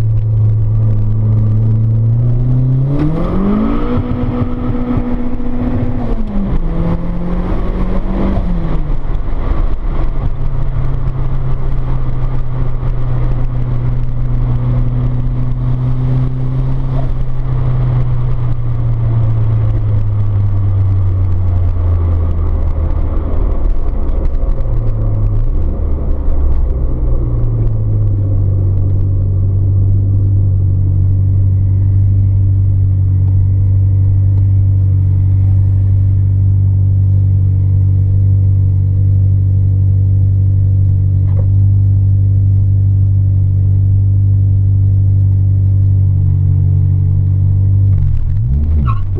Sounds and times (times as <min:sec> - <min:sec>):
Car: 0:00.0 - 0:49.2
Outside, urban or manmade: 0:00.0 - 0:49.2.